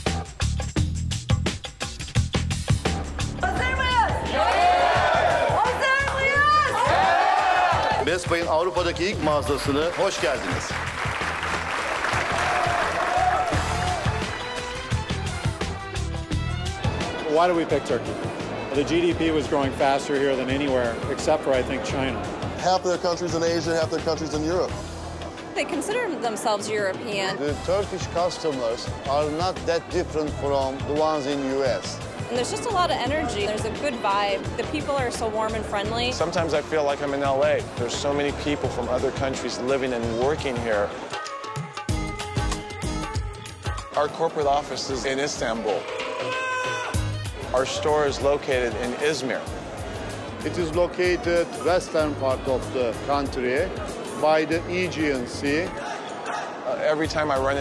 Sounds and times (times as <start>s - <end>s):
Music: 0.0s - 57.6s.